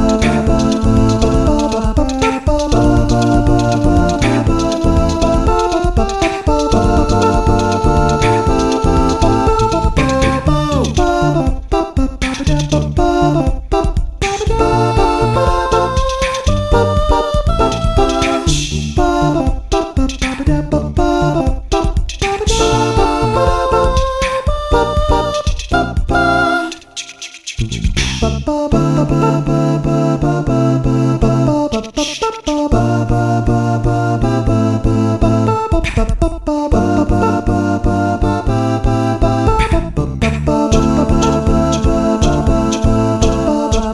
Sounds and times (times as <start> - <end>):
Music: 0.0 - 43.9.